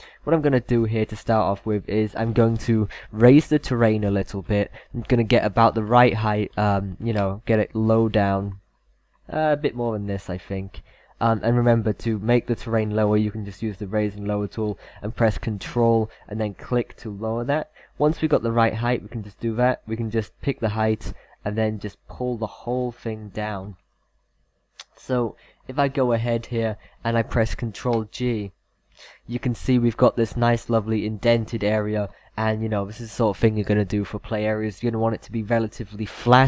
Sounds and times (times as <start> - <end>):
Narration, monologue: 0.0 - 36.4.